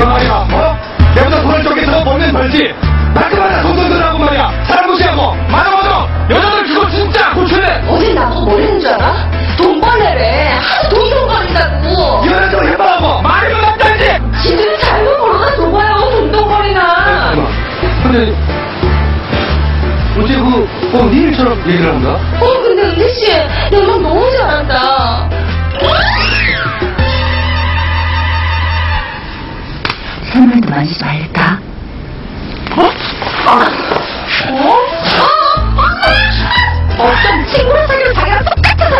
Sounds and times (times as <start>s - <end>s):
Music: 0.0s - 30.0s, 34.3s - 38.9s.